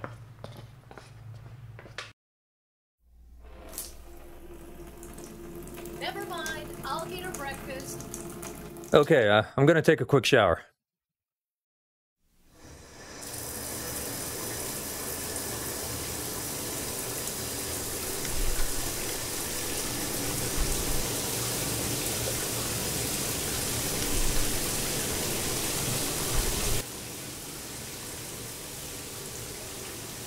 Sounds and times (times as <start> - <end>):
Speech: 6.0 - 8.0, 9.0 - 10.7.